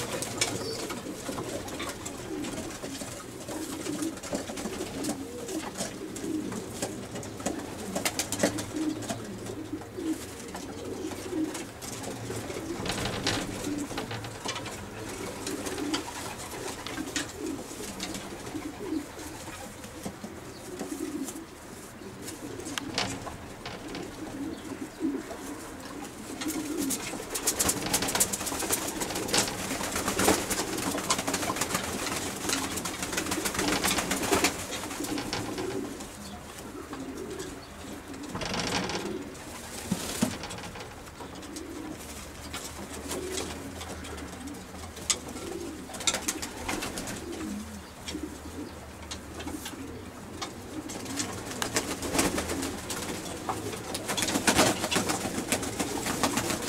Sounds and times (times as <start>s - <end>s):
Pigeon, dove: 0.0s - 56.6s.